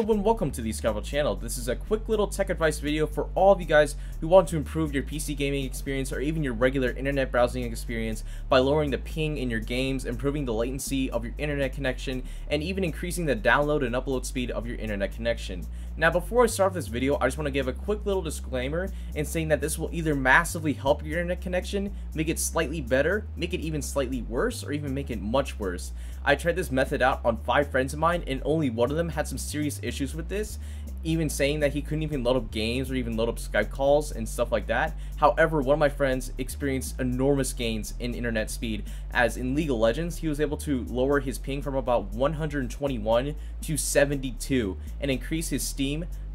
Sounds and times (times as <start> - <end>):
Speech: 0.0 - 46.2
Music: 0.0 - 46.3.